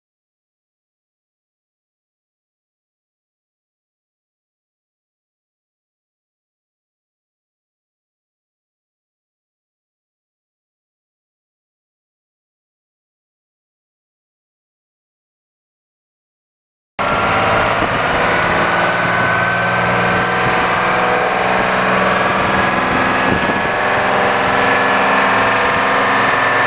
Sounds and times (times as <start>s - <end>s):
Idling: 17.0s - 26.6s
Truck: 17.0s - 26.6s.